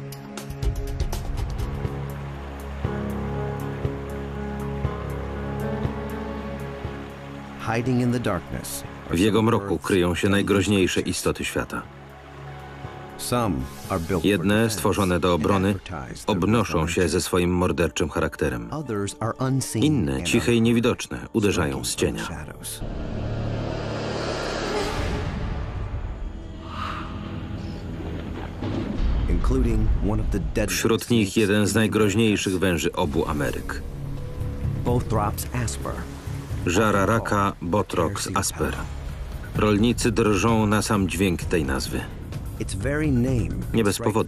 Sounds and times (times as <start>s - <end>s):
Music: 0.0s - 44.2s
Speech: 7.6s - 11.8s, 13.2s - 22.8s, 29.3s - 33.8s, 34.9s - 36.0s, 36.6s - 38.9s, 39.6s - 44.2s.